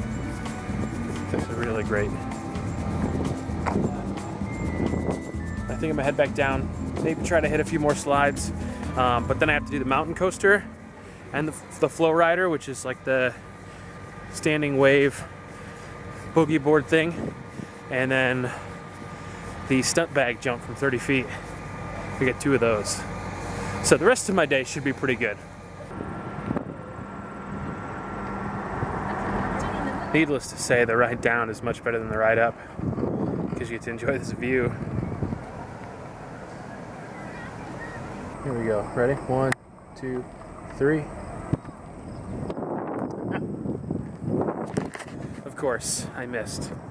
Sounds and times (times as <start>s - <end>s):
Outside, rural or natural: 0.0s - 46.9s
Speech: 5.7s - 10.6s, 22.2s - 23.1s, 29.6s - 32.6s, 33.6s - 34.8s, 38.4s - 40.2s, 40.8s - 41.1s, 45.4s - 46.8s.